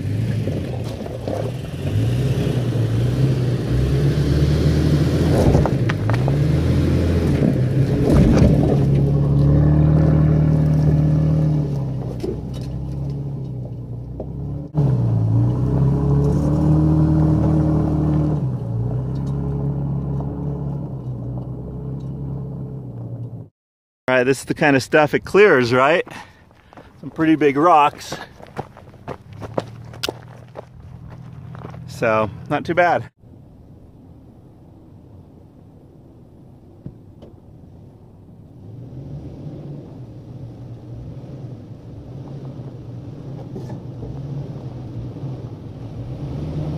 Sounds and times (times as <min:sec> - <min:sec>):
Truck: 0:00.0 - 0:23.5, 0:26.0 - 0:33.4, 0:36.4 - 0:46.7
Outside, rural or natural: 0:00.0 - 0:46.7
Speech: 0:24.1 - 0:26.2, 0:27.0 - 0:28.3, 0:31.9 - 0:33.1.